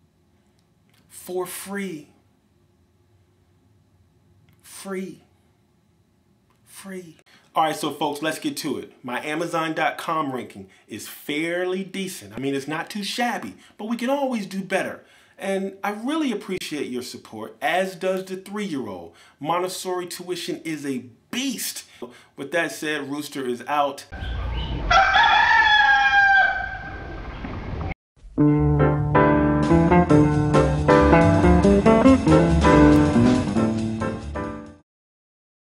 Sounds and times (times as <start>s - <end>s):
Crowing, cock-a-doodle-doo: 24.5s - 27.1s.